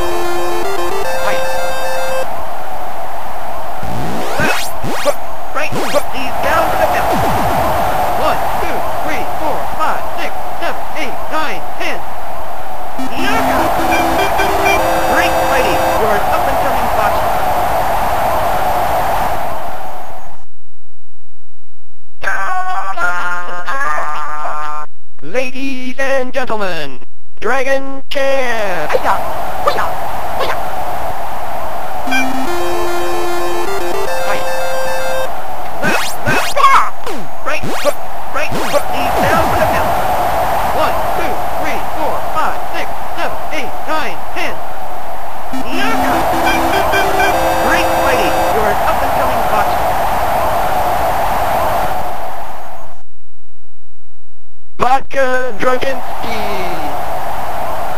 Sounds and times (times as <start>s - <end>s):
Speech: 5.6s - 7.2s, 8.2s - 12.0s, 13.0s - 17.3s, 22.2s - 30.6s, 35.8s - 39.9s, 40.8s - 44.6s, 45.6s - 49.8s, 54.8s - 57.0s.